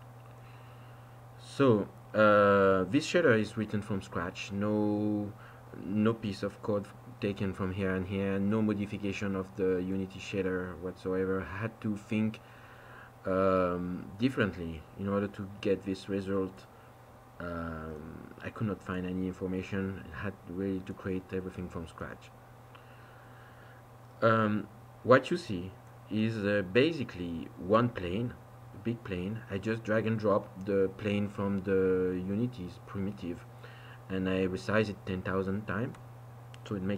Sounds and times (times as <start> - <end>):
Speech: 1.4 - 12.4, 13.3 - 16.7, 17.4 - 22.3, 24.2 - 33.5, 34.1 - 36.0, 36.6 - 36.9.